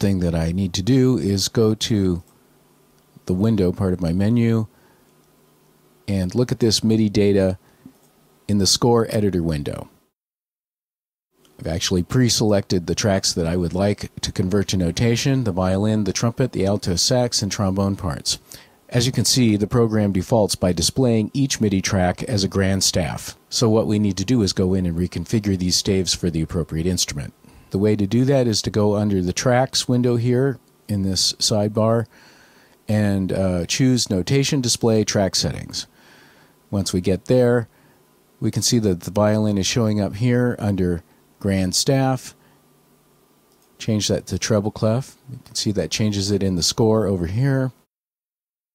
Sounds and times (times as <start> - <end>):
Speech: 0.0 - 2.3, 3.2 - 4.7, 6.1 - 7.6, 8.5 - 10.0, 11.6 - 32.1, 32.9 - 35.9, 36.7 - 37.7, 38.4 - 42.4, 43.8 - 47.9.